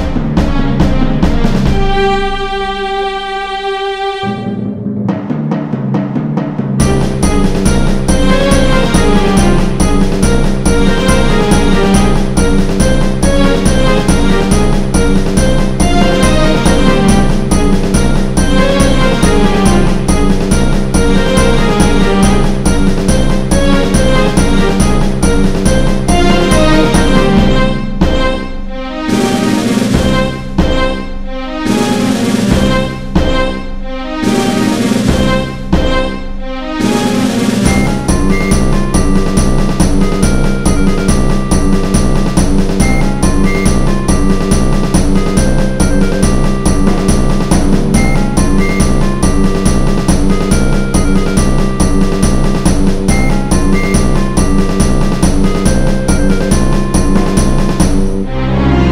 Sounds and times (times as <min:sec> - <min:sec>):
Music: 0:00.0 - 0:58.9.